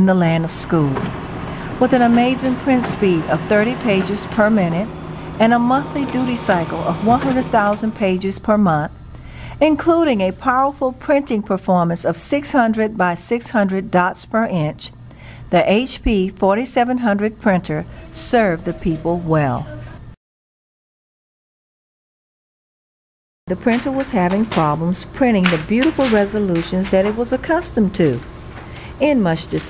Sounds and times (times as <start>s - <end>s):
Speech: 0.0s - 1.1s, 1.8s - 8.9s, 9.6s - 14.9s, 15.5s - 20.0s, 23.5s - 28.2s, 29.0s - 29.6s
Printer: 0.4s - 8.4s, 23.5s - 29.6s.